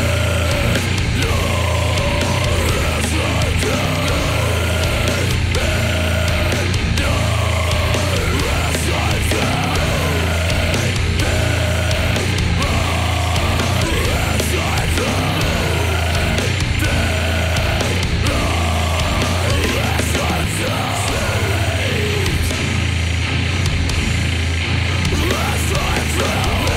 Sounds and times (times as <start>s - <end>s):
Music: 0.0s - 26.7s.